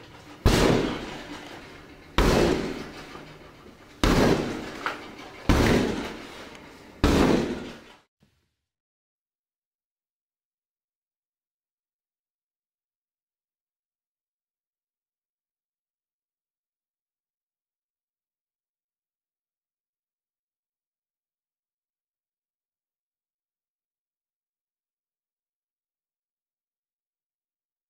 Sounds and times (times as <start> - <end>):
Door: 4.0 - 8.0.